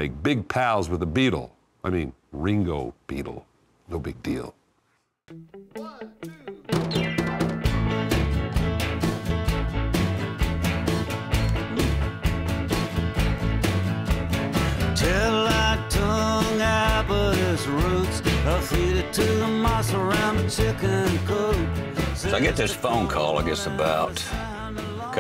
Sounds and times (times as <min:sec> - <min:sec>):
Speech: 0:00.0 - 0:04.6, 0:05.8 - 0:06.5, 0:22.2 - 0:24.4
Music: 0:05.3 - 0:25.2.